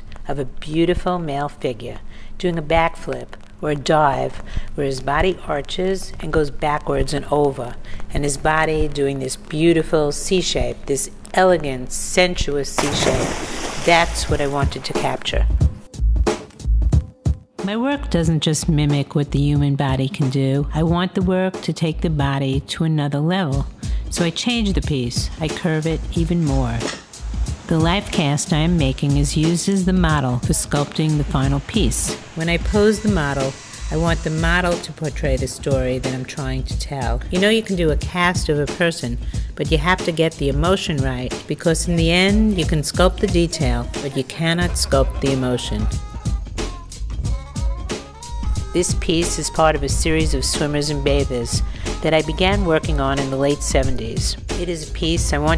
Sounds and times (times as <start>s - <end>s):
Music: 0.0s - 55.5s
Speech: 0.3s - 13.2s, 13.8s - 15.5s, 17.6s - 27.0s, 27.7s - 46.0s, 48.8s - 55.5s.